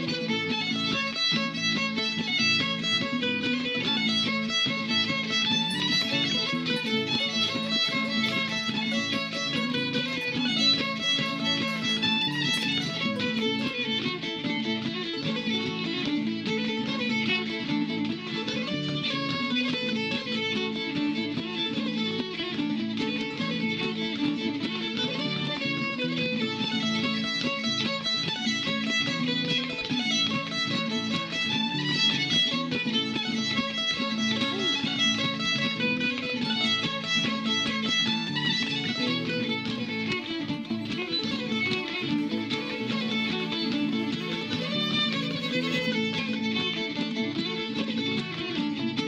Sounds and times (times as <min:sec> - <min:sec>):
Pizzicato: 0:05.6 - 0:13.9, 0:38.9 - 0:46.7.